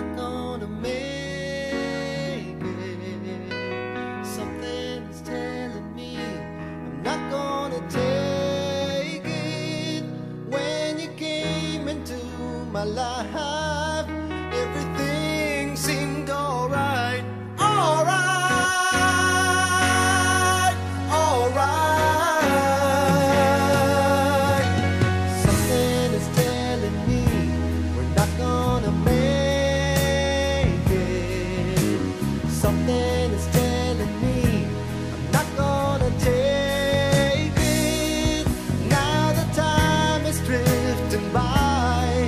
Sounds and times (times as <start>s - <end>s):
Music: 0.0s - 42.2s.